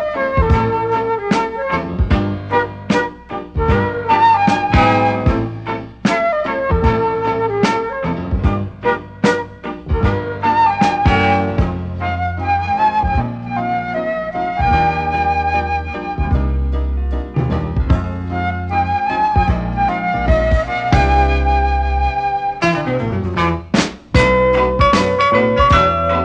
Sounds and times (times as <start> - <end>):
Tender music: 0.0 - 23.6.